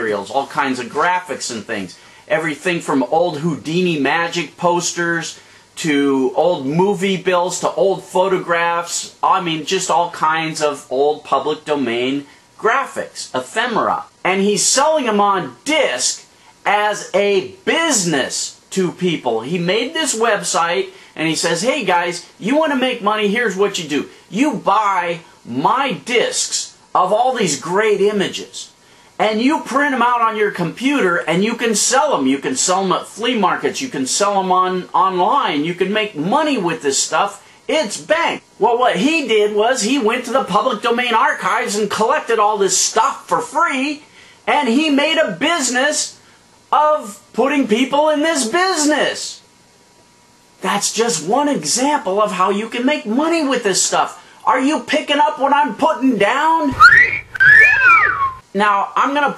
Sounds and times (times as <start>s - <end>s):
Speech: 0.0s - 49.5s, 50.6s - 56.8s, 58.4s - 59.3s
Inside, small room: 0.0s - 59.3s.